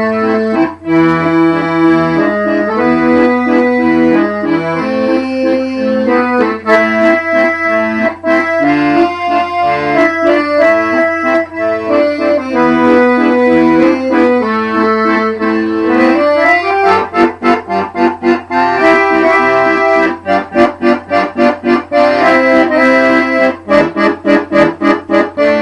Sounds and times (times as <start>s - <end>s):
Accordion: 0.0s - 25.6s.